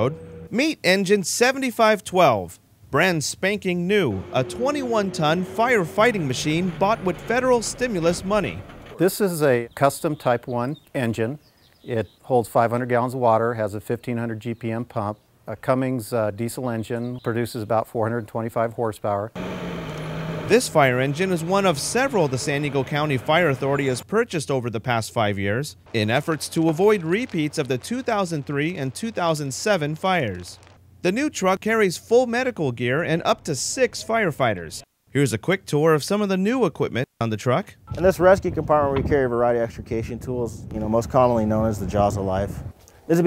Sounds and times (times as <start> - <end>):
Heavy engine (low frequency): 0.0 - 0.6, 3.8 - 9.0, 19.4 - 24.1
Vehicle: 0.0 - 0.6, 3.8 - 9.0, 19.4 - 24.0
Speech: 0.0 - 19.4, 20.5 - 43.2.